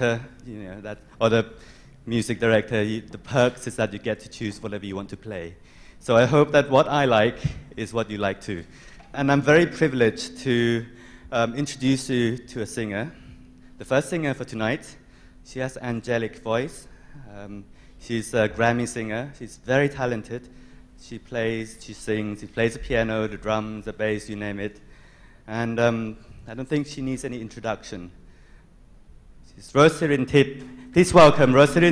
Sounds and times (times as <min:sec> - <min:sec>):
Speech: 0:00.0 - 0:13.2, 0:13.8 - 0:24.8, 0:25.5 - 0:28.2, 0:29.5 - 0:31.9.